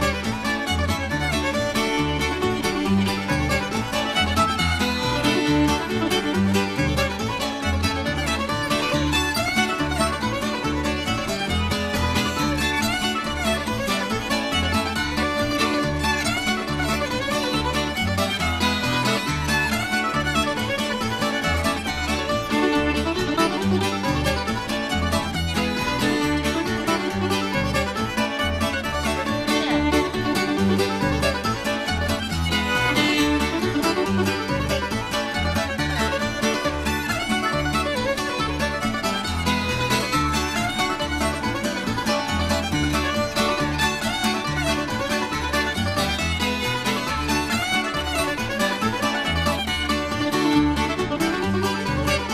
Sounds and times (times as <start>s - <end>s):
Banjo: 0.0s - 52.3s
Bluegrass: 0.0s - 52.3s
Mandolin: 0.0s - 52.3s.